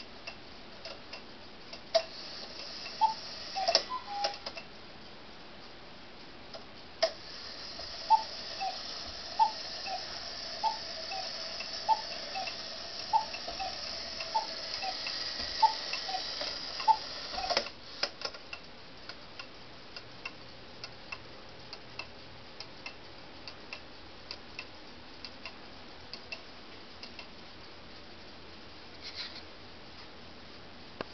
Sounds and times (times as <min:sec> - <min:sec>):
Tick-tock: 0:00.2 - 0:02.1, 0:10.6 - 0:27.3.